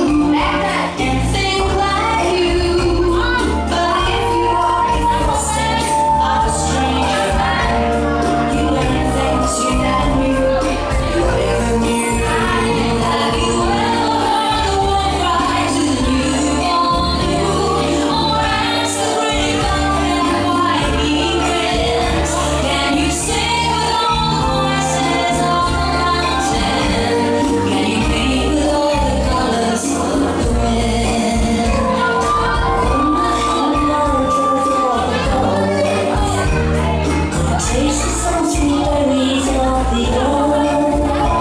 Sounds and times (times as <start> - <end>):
Music: 0.0 - 41.4.